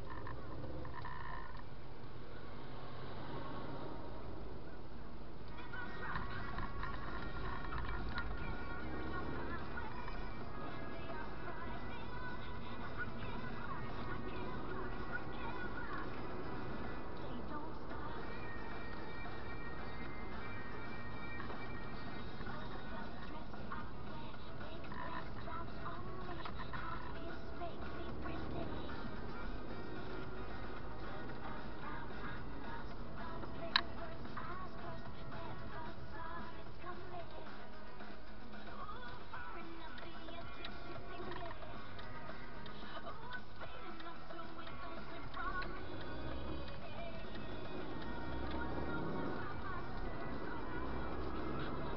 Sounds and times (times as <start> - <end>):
Music: 0.0 - 1.6, 2.2 - 51.9.